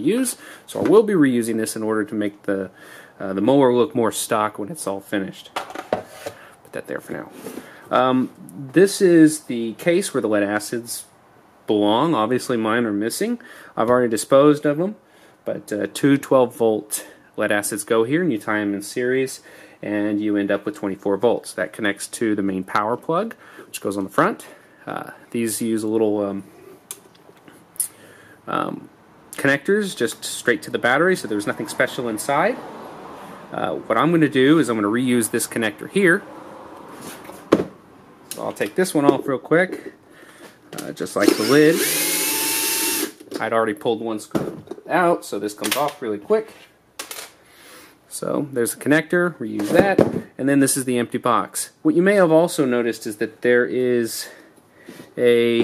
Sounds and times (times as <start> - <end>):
Speech: 0.0 - 5.6, 6.7 - 11.1, 11.7 - 26.5, 28.5 - 32.6, 33.5 - 36.2, 38.4 - 40.0, 40.8 - 41.9, 43.4 - 46.6, 48.1 - 54.4, 55.2 - 55.6.